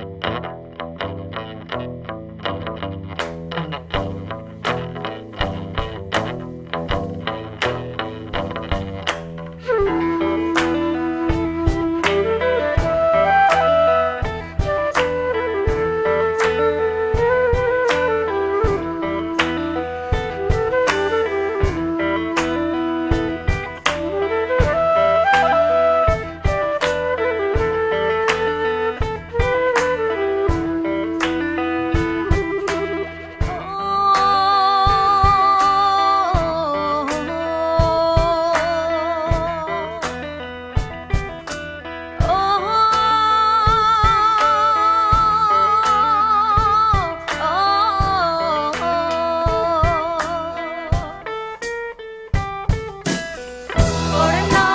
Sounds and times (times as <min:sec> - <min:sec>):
Music: 0:00.0 - 0:54.7.